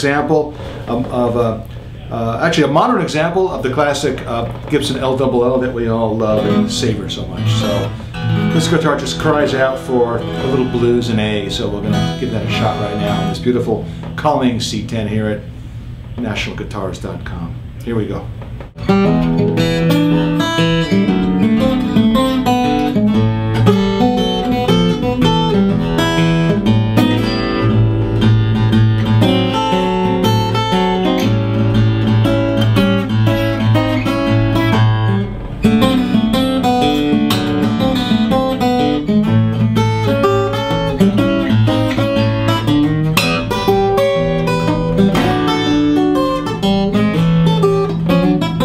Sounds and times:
Speech: 0.0s - 7.9s, 8.5s - 15.5s, 16.2s - 18.3s
Strum: 0.0s - 48.6s.

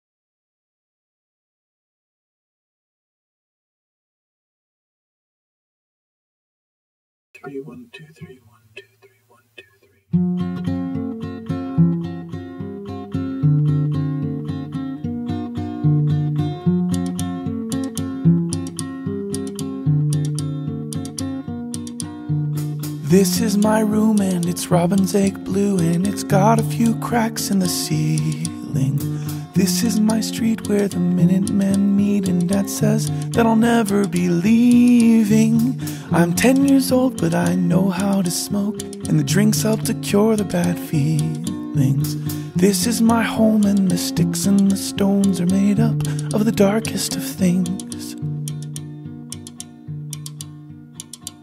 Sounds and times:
Independent music: 10.2s - 51.4s.

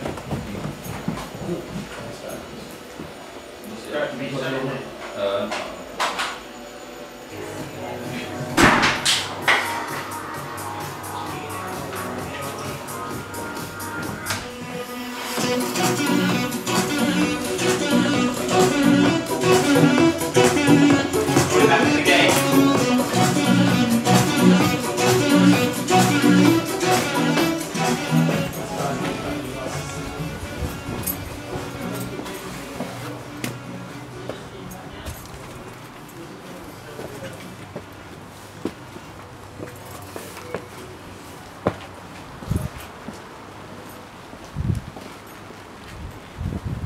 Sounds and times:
Music: 7.2s - 34.4s.

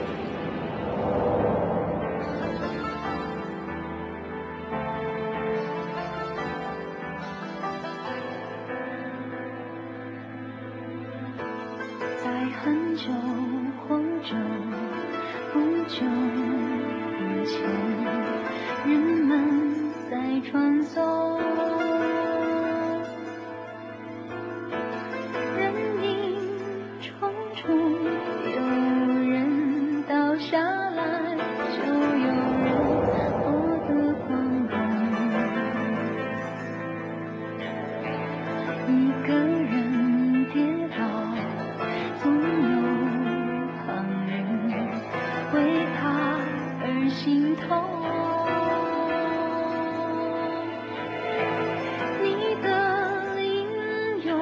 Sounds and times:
Sad music: 0.0s - 54.4s.

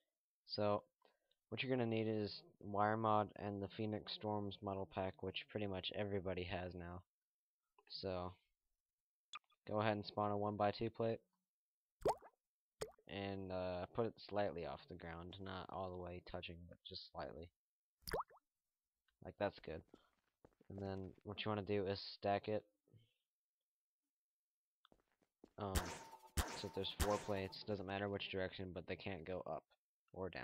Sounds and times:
Speech: 0.5s - 0.9s, 1.5s - 7.1s, 7.8s - 8.5s, 9.7s - 11.3s, 13.1s - 17.6s, 19.2s - 19.9s, 20.7s - 22.7s, 25.6s - 26.0s, 26.6s - 30.4s.

